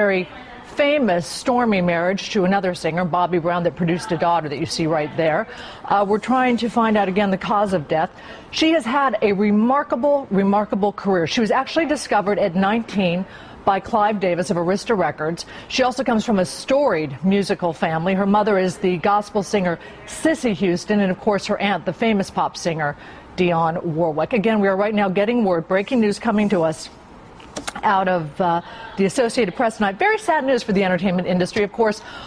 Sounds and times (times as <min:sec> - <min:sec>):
Speech: 0:00.0 - 0:26.9, 0:27.8 - 0:32.0.